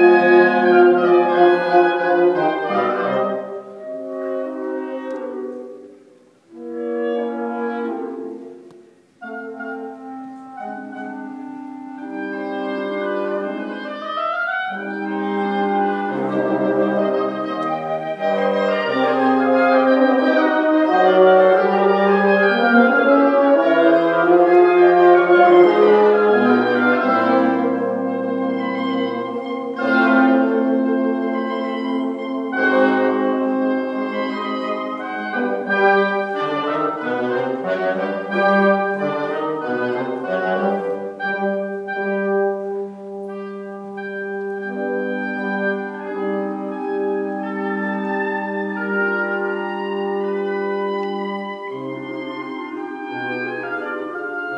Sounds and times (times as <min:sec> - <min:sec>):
Orchestra: 0:00.0 - 0:54.5.